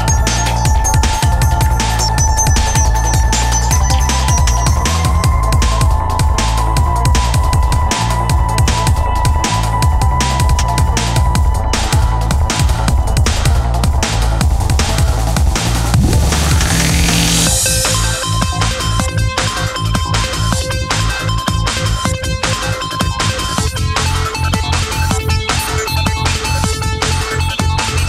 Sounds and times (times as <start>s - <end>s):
Dubstep: 0.0s - 6.6s, 10.6s - 19.9s
Techno: 0.0s - 28.0s.